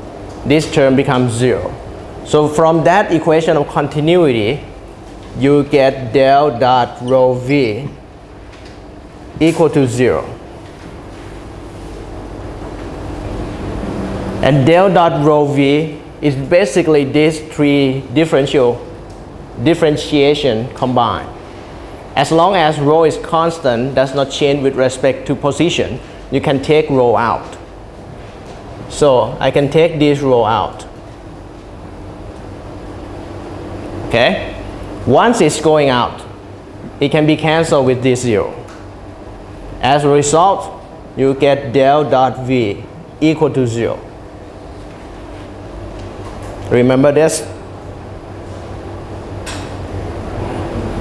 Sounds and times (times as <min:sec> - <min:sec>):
Speech: 0:00.4 - 0:04.7, 0:05.4 - 0:08.0, 0:09.4 - 0:10.4, 0:14.4 - 0:18.9, 0:19.6 - 0:21.4, 0:22.2 - 0:27.6, 0:28.9 - 0:31.0, 0:34.1 - 0:36.4, 0:37.0 - 0:38.7, 0:39.8 - 0:44.1, 0:46.7 - 0:47.6.